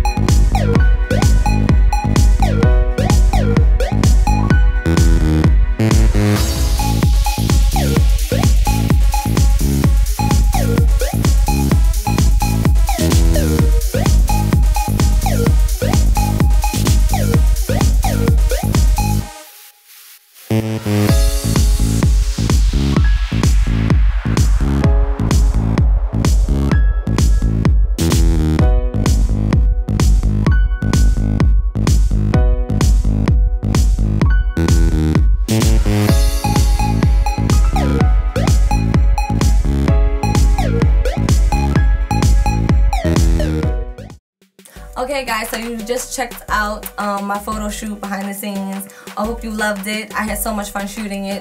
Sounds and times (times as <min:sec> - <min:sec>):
Electronic dance music: 0:00.0 - 0:51.4.